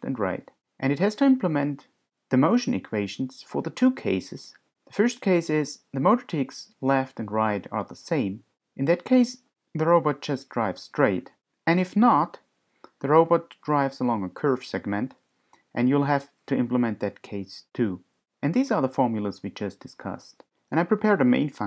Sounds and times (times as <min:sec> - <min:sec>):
Speech: 0:00.0 - 0:21.6.